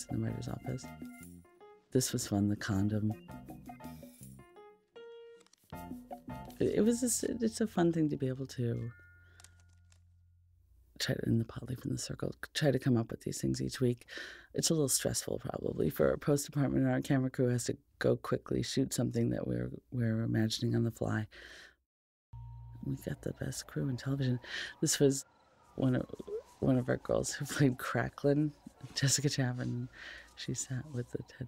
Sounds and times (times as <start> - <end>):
Speech: 0.0 - 0.9, 2.0 - 3.2, 6.6 - 8.9, 11.0 - 21.3, 22.8 - 25.2, 25.8 - 31.4.